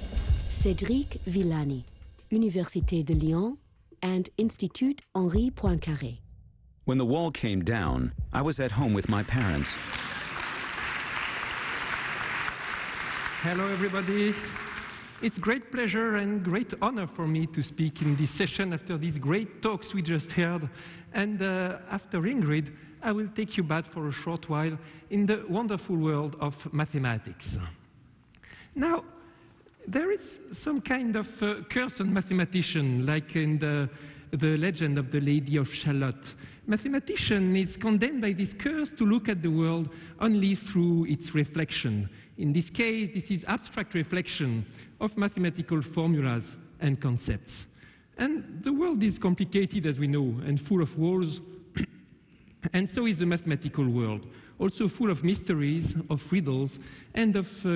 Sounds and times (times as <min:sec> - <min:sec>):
Speech: 0:00.6 - 0:06.2, 0:06.9 - 0:09.8, 0:13.4 - 0:14.5, 0:15.2 - 0:27.8, 0:29.8 - 0:51.9, 0:52.6 - 0:57.7.